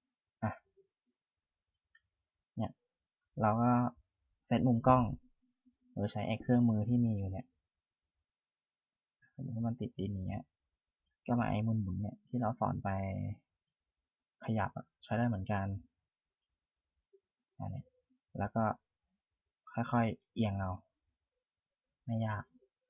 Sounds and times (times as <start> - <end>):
Speech: 0.4 - 0.7, 2.6 - 2.8, 3.4 - 5.2, 6.0 - 7.6, 9.4 - 10.5, 11.3 - 13.5, 14.4 - 15.9, 17.6 - 18.8, 19.7 - 20.9, 22.1 - 22.6.